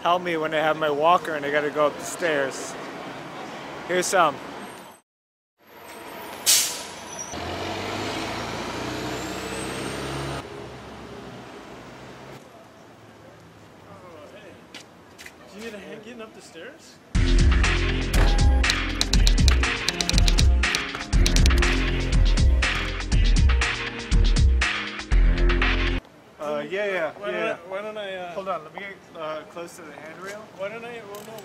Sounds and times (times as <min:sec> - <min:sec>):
Speech: 0:00.0 - 0:02.8, 0:03.9 - 0:04.4, 0:12.4 - 0:14.7, 0:15.4 - 0:17.0, 0:26.4 - 0:31.4.